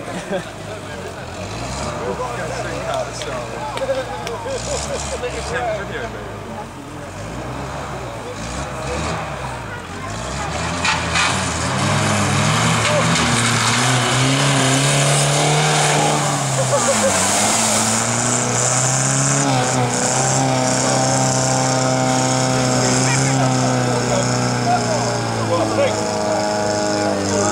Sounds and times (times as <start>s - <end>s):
Speech: 0.0s - 7.2s, 22.6s - 27.5s.